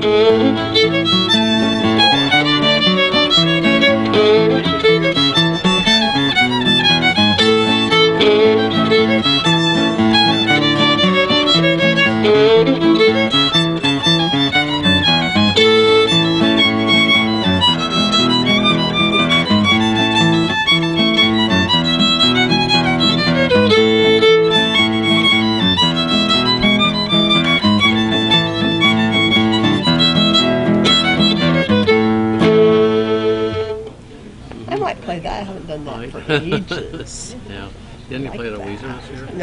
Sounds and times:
Violin, fiddle: 0.0s - 33.9s.

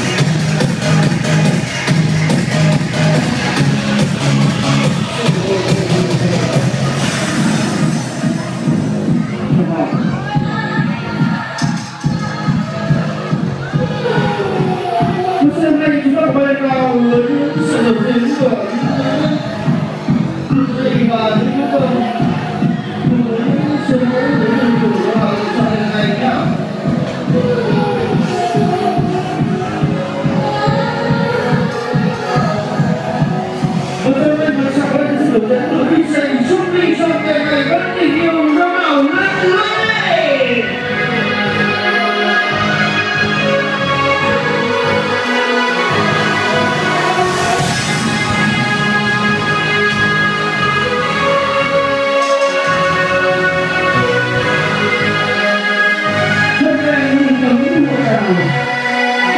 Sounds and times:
Disco: 0.0s - 59.3s
Speech: 15.4s - 19.5s, 20.5s - 22.4s, 23.0s - 26.6s, 34.0s - 40.8s, 56.6s - 58.6s.

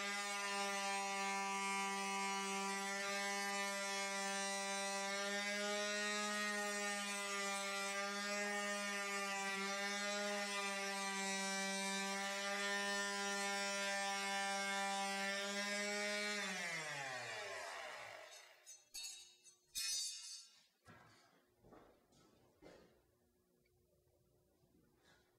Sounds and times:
Electric shaver, electric razor: 0.0s - 18.6s.

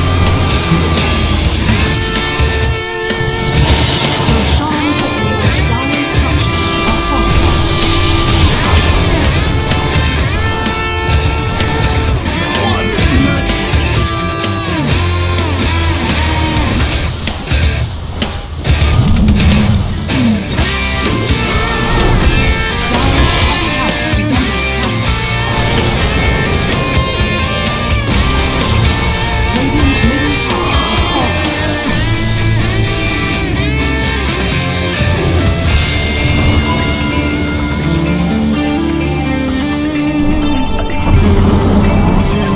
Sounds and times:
Heavy metal: 0.0s - 42.5s.

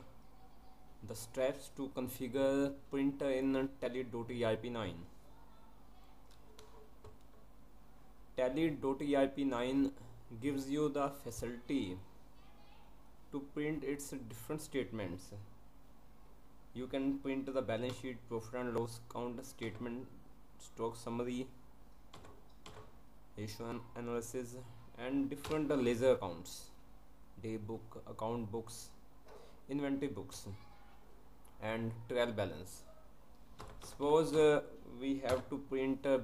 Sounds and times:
Speech: 0.0s - 6.3s, 8.4s - 15.5s, 16.8s - 21.6s, 23.4s - 26.8s, 27.4s - 29.0s, 29.7s - 30.8s, 31.6s - 32.9s, 33.9s - 36.2s.

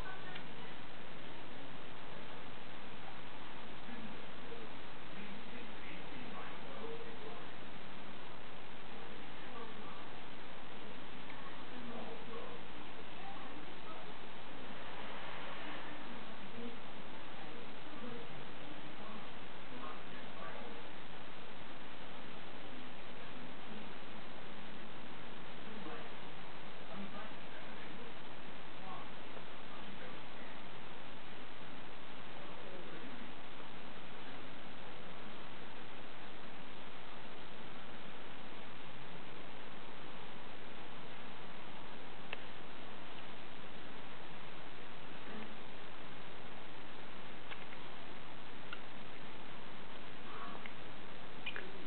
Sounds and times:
Speech: 0.0s - 1.0s, 1.9s - 21.1s, 22.5s - 24.2s, 25.5s - 30.8s, 32.2s - 33.6s, 45.1s - 45.7s, 50.2s - 50.9s.

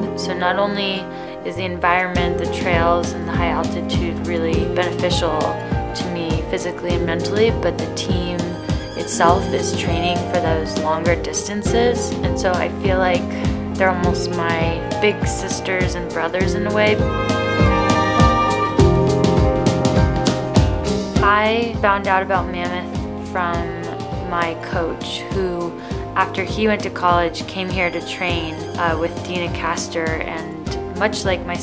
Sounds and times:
Speech: 0.0s - 17.0s, 21.2s - 31.6s
Music: 0.0s - 31.6s.

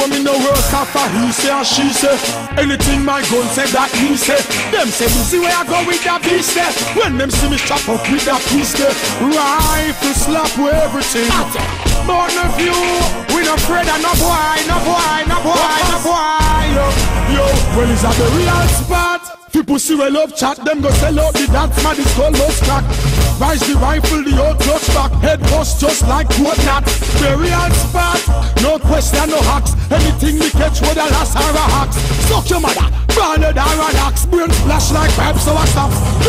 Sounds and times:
Music: 0.0s - 36.2s.

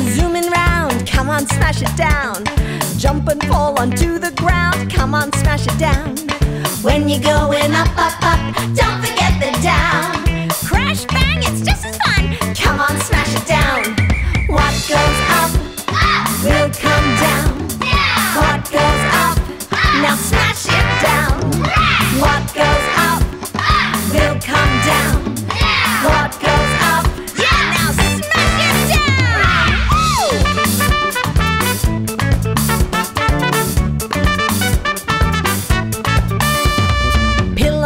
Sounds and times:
Music: 0.0s - 37.8s.

